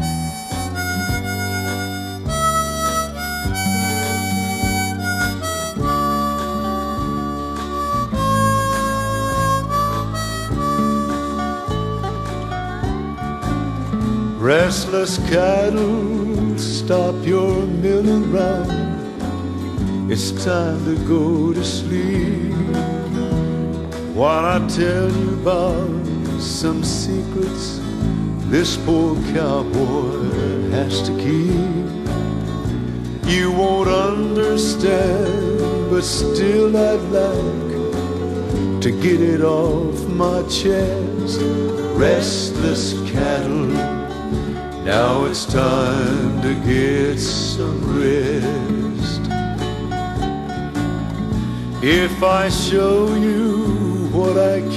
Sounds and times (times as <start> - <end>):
Music: 0.0 - 54.7.